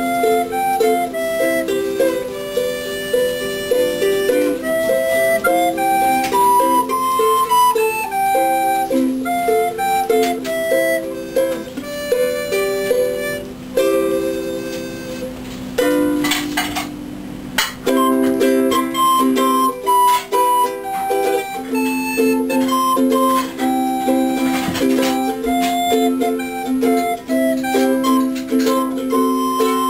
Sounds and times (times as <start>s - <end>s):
Ukulele: 0.0s - 29.9s.